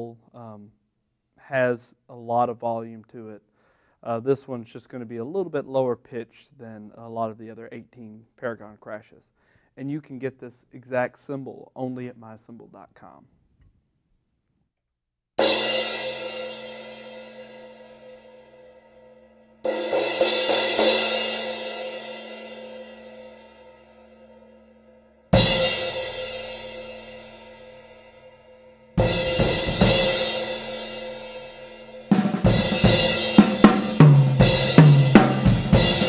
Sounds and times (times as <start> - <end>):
Speech: 0.0 - 0.8, 1.4 - 3.4, 4.0 - 13.3
Music: 15.4 - 36.0.